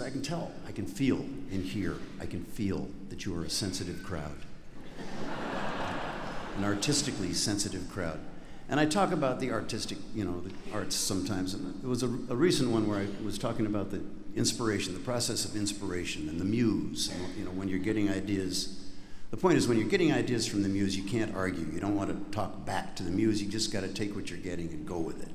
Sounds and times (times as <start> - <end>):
Speech: 0.0 - 4.5, 6.5 - 18.7, 19.3 - 25.3.